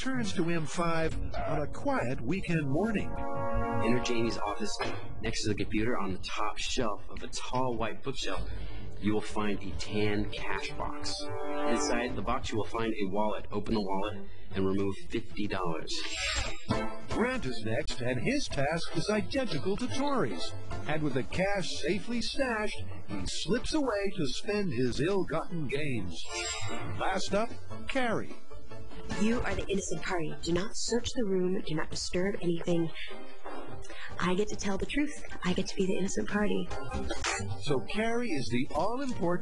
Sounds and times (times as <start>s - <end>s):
Speech: 0.0s - 3.1s, 3.8s - 16.4s, 17.1s - 26.3s, 27.0s - 28.3s, 29.2s - 33.1s, 34.1s - 36.7s, 37.3s - 39.4s
Music: 0.0s - 39.4s.